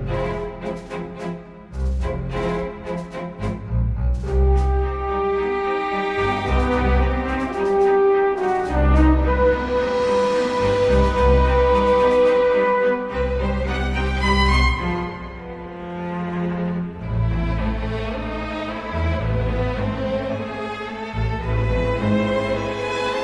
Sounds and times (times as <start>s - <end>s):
Music: 0.0s - 23.2s.